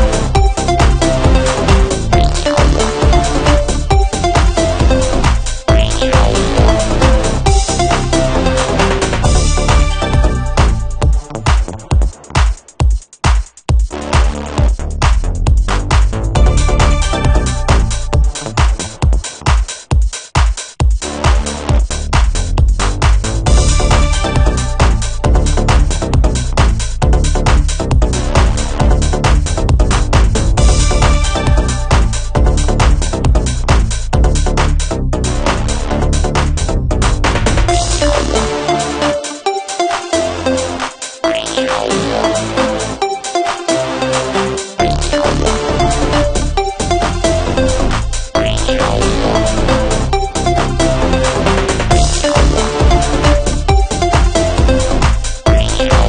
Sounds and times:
Drum and bass: 0:00.0 - 0:56.0
Drum machine: 0:00.0 - 0:56.0
Electronica: 0:00.0 - 0:56.0
Techno: 0:00.0 - 0:56.0.

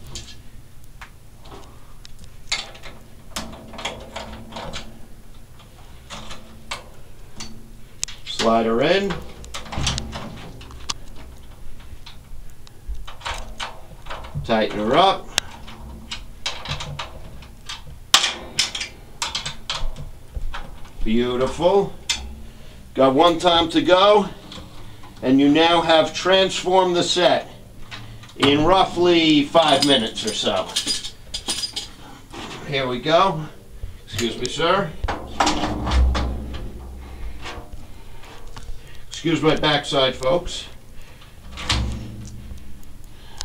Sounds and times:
Speech: 0:08.3 - 0:09.2, 0:14.4 - 0:15.3, 0:21.0 - 0:22.0, 0:23.0 - 0:24.4, 0:25.2 - 0:27.6, 0:28.4 - 0:30.8, 0:32.4 - 0:35.0, 0:39.1 - 0:40.8.

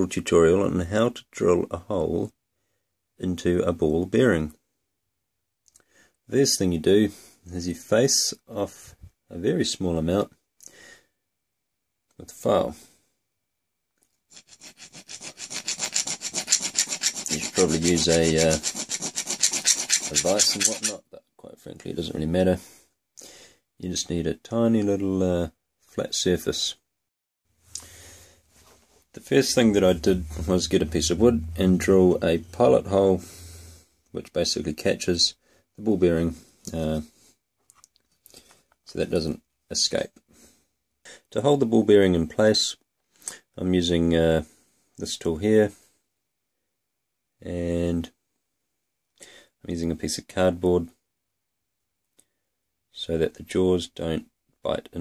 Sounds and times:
Speech: 0:00.0 - 0:02.4, 0:03.2 - 0:04.6, 0:06.3 - 0:10.3, 0:12.2 - 0:12.9, 0:17.3 - 0:18.6, 0:20.1 - 0:22.7, 0:23.8 - 0:26.8, 0:29.2 - 0:33.3, 0:34.2 - 0:37.1, 0:38.9 - 0:40.2, 0:41.3 - 0:42.8, 0:43.6 - 0:45.8, 0:47.4 - 0:48.2, 0:49.6 - 0:51.0, 0:52.9 - 0:55.0.

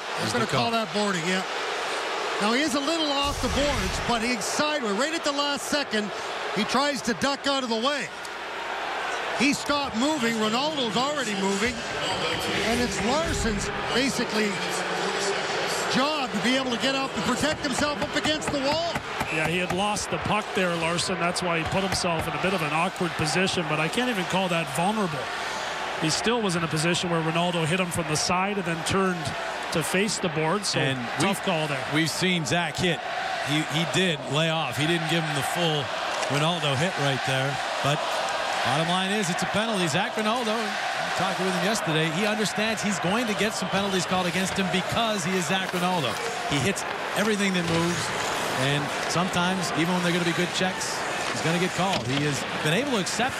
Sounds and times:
Speech: 0:00.2 - 0:01.5, 0:02.4 - 0:08.1, 0:09.4 - 0:25.3, 0:26.0 - 0:38.0, 0:38.6 - 0:53.4.

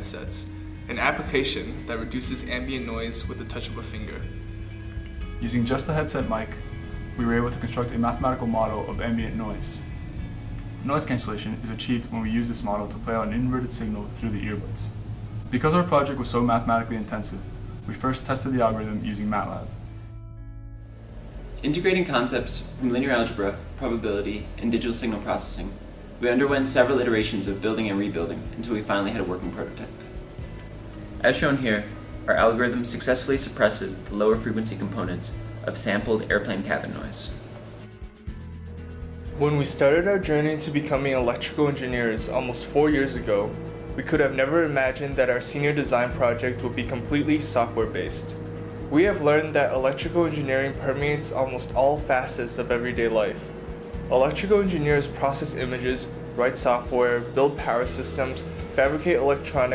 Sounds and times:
Speech: 0:00.0 - 0:04.3, 0:05.4 - 0:06.6, 0:07.2 - 0:09.8, 0:10.8 - 0:14.9, 0:15.5 - 0:19.7, 0:21.6 - 0:30.0, 0:31.2 - 0:37.4, 0:39.4 - 0:53.4, 0:54.1 - 0:59.7
Music: 0:00.0 - 0:59.7.

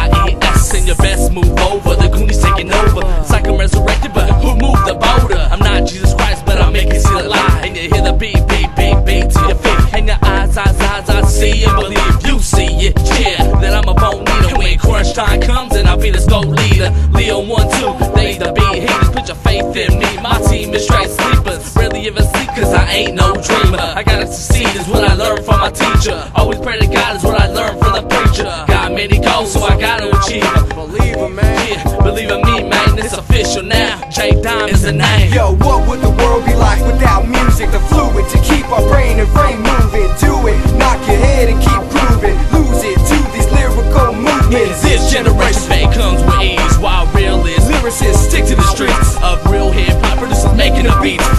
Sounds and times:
Music: 0:00.0 - 0:51.3.

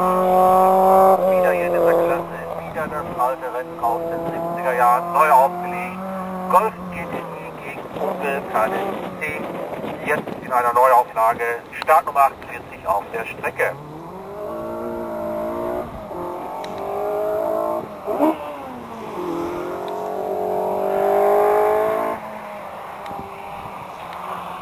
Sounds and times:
Car: 0:00.0 - 0:24.6
Speech: 0:01.2 - 0:13.8.

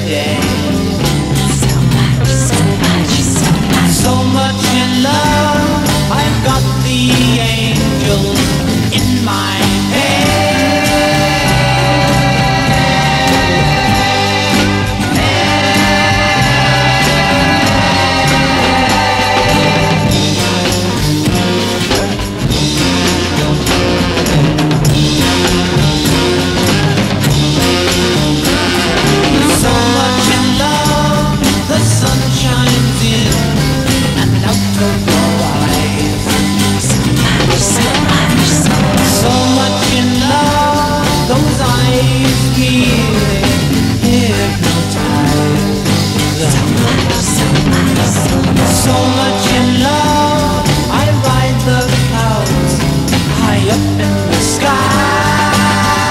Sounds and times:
Music: 0:00.0 - 0:56.1.

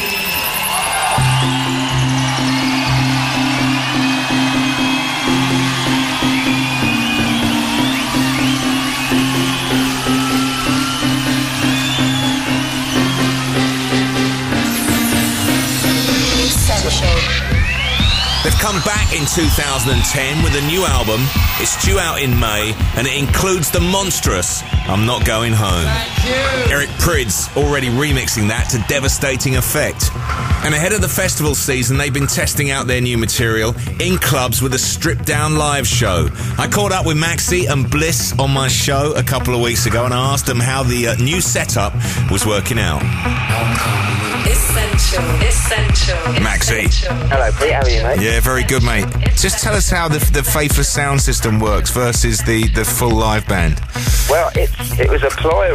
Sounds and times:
Music: 0:00.0 - 0:55.7
Speech: 0:18.4 - 0:30.0, 0:30.6 - 0:55.7.

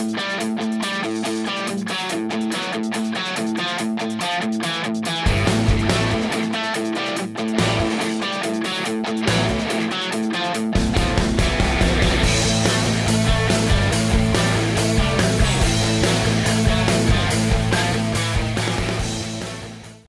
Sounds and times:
Music: 0:00.0 - 0:20.0.

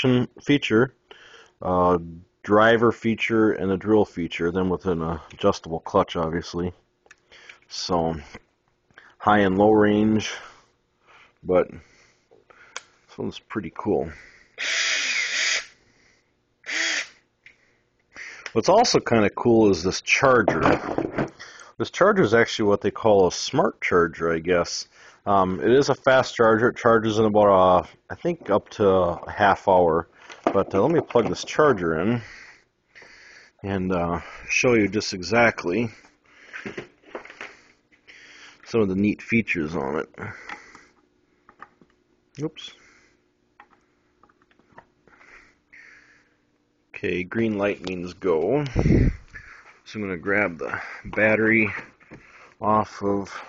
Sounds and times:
Speech: 0:00.0 - 0:01.0, 0:01.6 - 0:06.8, 0:07.7 - 0:08.4, 0:09.2 - 0:10.5, 0:11.4 - 0:11.8, 0:13.1 - 0:14.2, 0:18.5 - 0:20.9, 0:21.8 - 0:32.3, 0:33.6 - 0:36.0, 0:38.7 - 0:40.4, 0:42.4 - 0:42.8, 0:46.9 - 0:48.9, 0:49.9 - 0:51.9, 0:52.6 - 0:53.4
Drill: 0:14.6 - 0:15.8, 0:16.7 - 0:17.2.

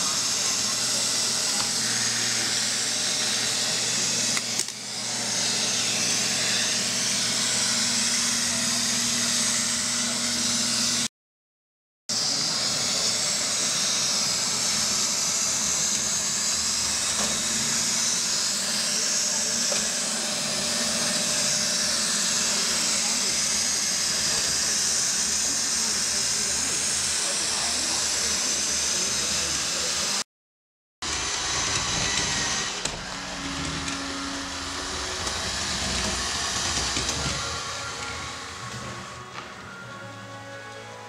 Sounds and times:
Vacuum cleaner: 0:00.0 - 0:11.1, 0:12.1 - 0:30.2, 0:31.0 - 0:41.0.

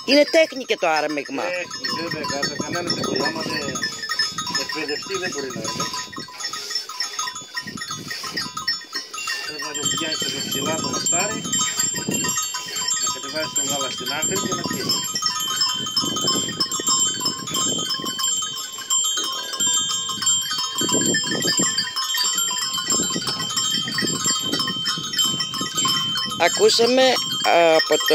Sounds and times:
Speech: 0:00.1 - 0:03.8, 0:04.6 - 0:05.9, 0:09.4 - 0:11.4, 0:13.2 - 0:14.8, 0:26.4 - 0:28.1
Livestock, farm animals, working animals: 0:00.1 - 0:13.2, 0:16.6 - 0:25.0.

